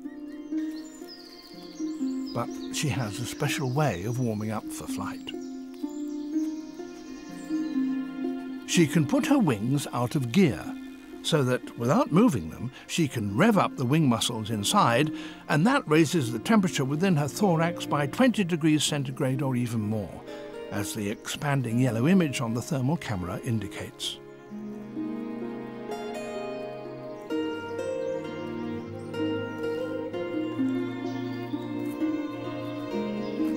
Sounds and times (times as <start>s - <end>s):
Music: 0.0s - 33.5s
Speech: 2.4s - 5.3s, 8.7s - 24.2s.